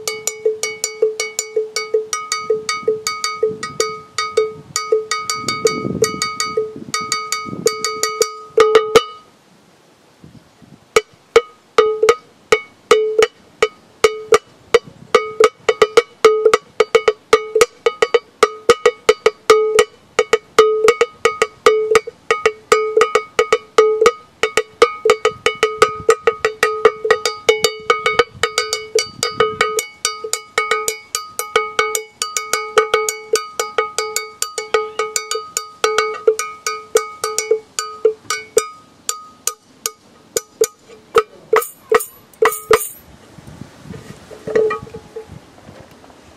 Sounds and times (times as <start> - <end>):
Music: 15.2 - 39.7.